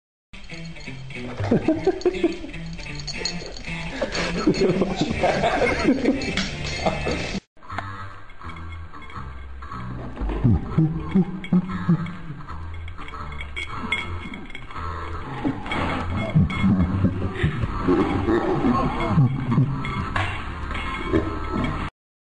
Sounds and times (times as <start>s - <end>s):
Music: 0.4s - 21.9s
Animal: 13.0s - 21.9s.